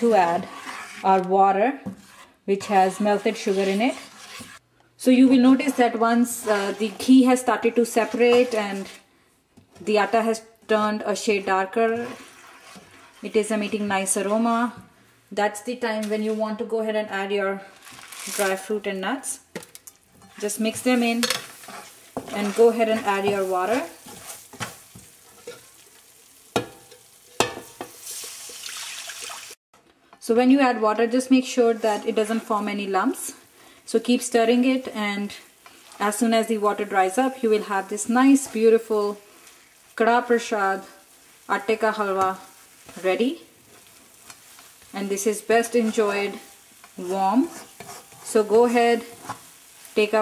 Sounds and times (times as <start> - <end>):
Frying (food): 0.0 - 0.9, 3.0 - 9.0, 9.6 - 16.7, 17.7 - 29.6, 30.6 - 50.2
Speech: 5.0 - 8.9, 13.3 - 14.8, 15.4 - 17.7, 22.3 - 24.0, 30.2 - 35.4, 36.0 - 39.2, 41.5 - 43.4, 45.0 - 46.4, 47.0 - 47.5, 48.3 - 49.1.